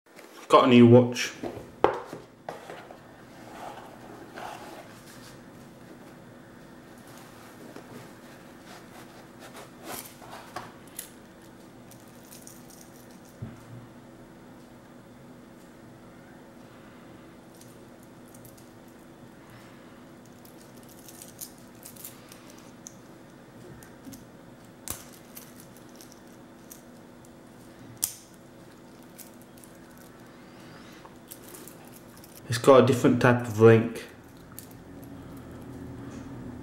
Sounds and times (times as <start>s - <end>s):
Speech: 0.4s - 1.4s, 32.4s - 34.2s.